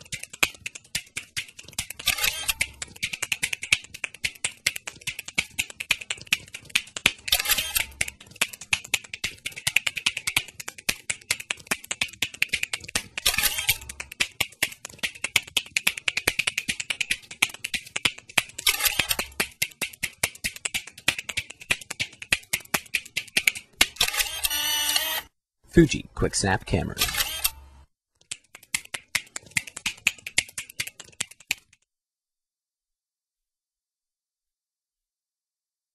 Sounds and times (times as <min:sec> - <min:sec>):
Single-lens reflex camera: 0:01.8 - 0:03.2, 0:07.1 - 0:08.2, 0:13.0 - 0:14.0, 0:18.6 - 0:19.4, 0:23.8 - 0:25.3, 0:27.0 - 0:27.7
Speech: 0:25.7 - 0:27.1.